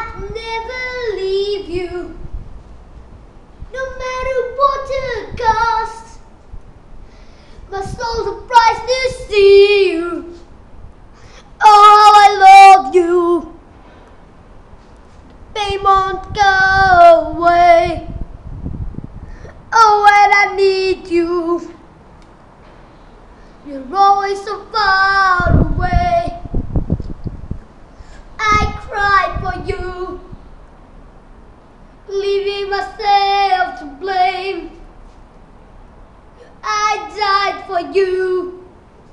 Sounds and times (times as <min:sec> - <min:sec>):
Child singing: 0:00.0 - 0:02.2, 0:03.7 - 0:06.2, 0:07.7 - 0:10.4, 0:11.6 - 0:13.6, 0:15.5 - 0:18.2, 0:19.7 - 0:21.8, 0:23.6 - 0:26.5, 0:28.4 - 0:30.3, 0:32.1 - 0:34.8, 0:36.6 - 0:38.7.